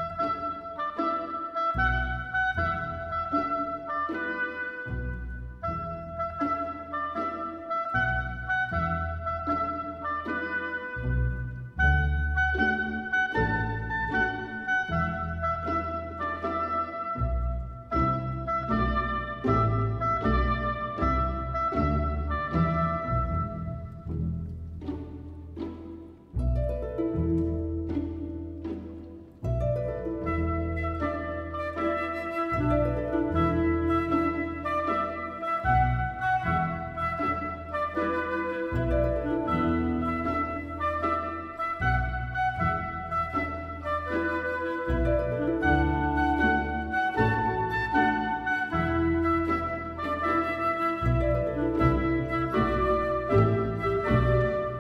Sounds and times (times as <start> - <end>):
Music: 0.0 - 54.8.